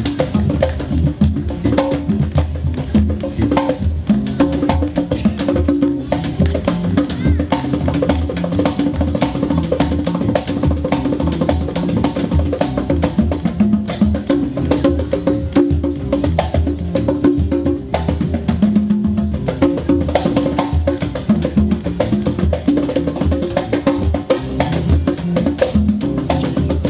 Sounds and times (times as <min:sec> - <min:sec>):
Music: 0:00.0 - 0:26.9
Outside, urban or manmade: 0:00.0 - 0:26.9.